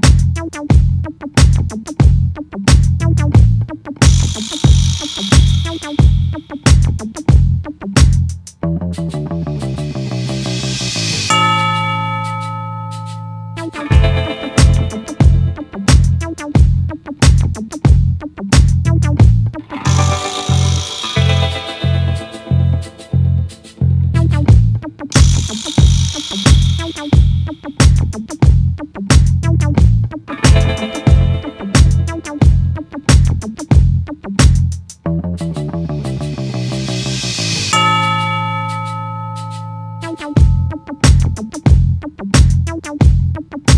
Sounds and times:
Music: 0.0 - 43.7.

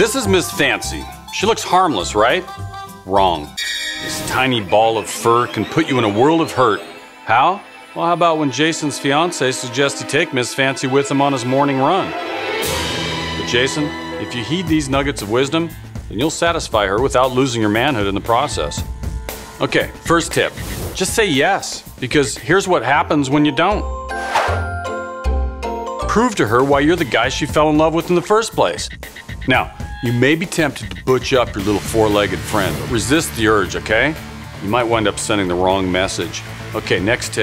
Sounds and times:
Speech: 0.0 - 2.5, 3.1 - 12.2, 13.4 - 18.8, 19.6 - 23.9, 26.0 - 28.9, 29.5 - 37.4
Music: 0.0 - 37.4.

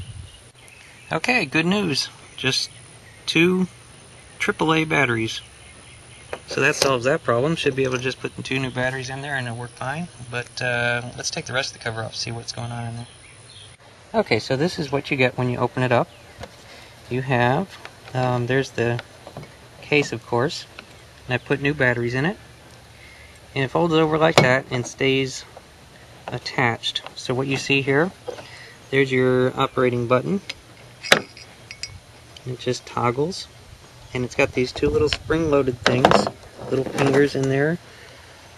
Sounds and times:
Environmental noise: 0.0 - 38.5
Outside, rural or natural: 0.0 - 38.5
Speech: 1.1 - 3.7, 4.4 - 5.5, 6.5 - 13.1, 14.1 - 16.1, 17.1 - 19.0, 19.8 - 20.7, 21.3 - 22.4, 23.6 - 25.5, 26.3 - 28.2, 28.9 - 30.6, 32.4 - 33.5, 34.1 - 37.8.

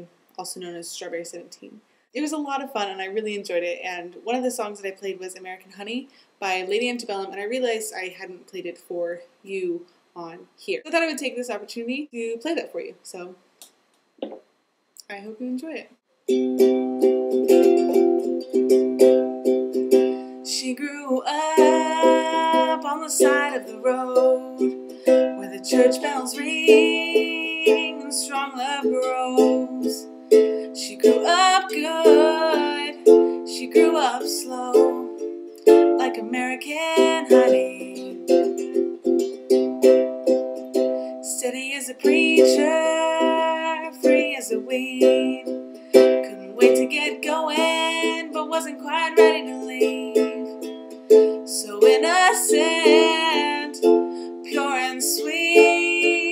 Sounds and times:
Speech: 0.0 - 13.4, 15.0 - 16.0
Inside, small room: 0.0 - 56.3
Ukulele: 16.3 - 56.3.

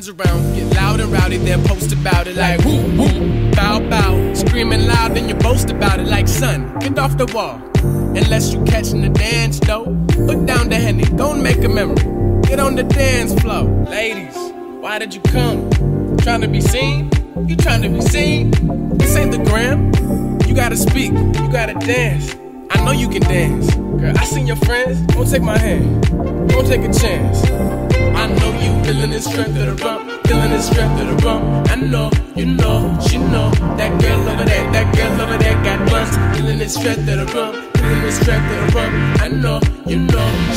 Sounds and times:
Reggae: 0.0 - 40.5.

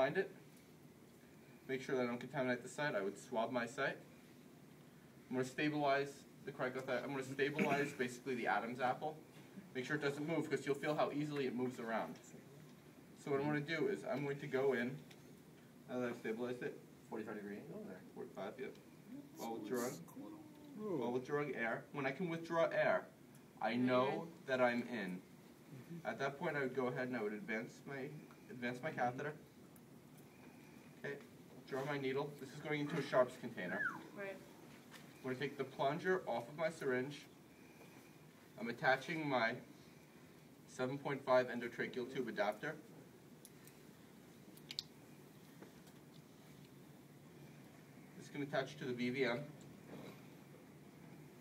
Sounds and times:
Speech: 1.7 - 4.0, 5.3 - 9.2, 15.9 - 25.2, 26.0 - 29.4, 31.0 - 34.4, 35.2 - 37.3, 38.6 - 39.6, 40.7 - 42.9, 48.2 - 49.5.

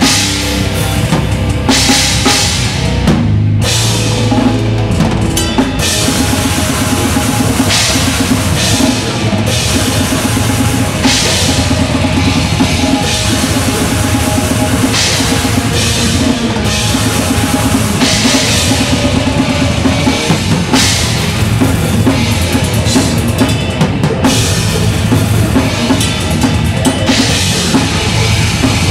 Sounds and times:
Drum kit: 0.0 - 28.9.

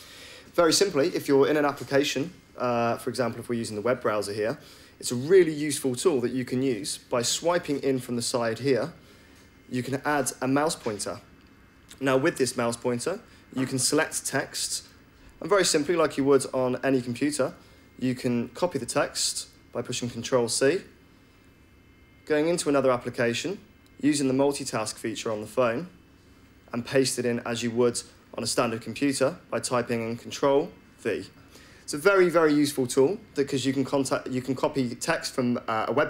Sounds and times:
Speech: 0.5 - 9.0, 9.7 - 11.3, 11.9 - 21.0, 22.2 - 26.0, 26.7 - 36.0.

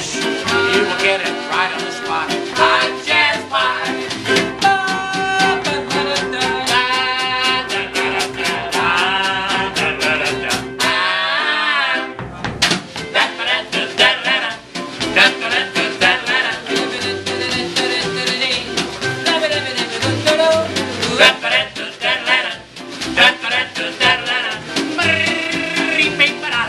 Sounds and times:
Musical instrument: 0.0 - 26.6.

